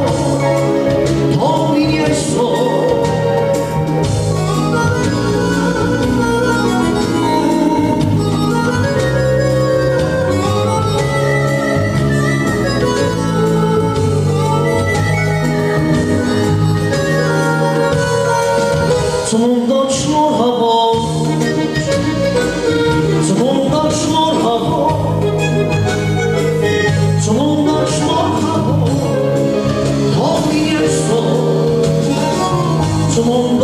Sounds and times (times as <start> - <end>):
Music: 0.0 - 33.6.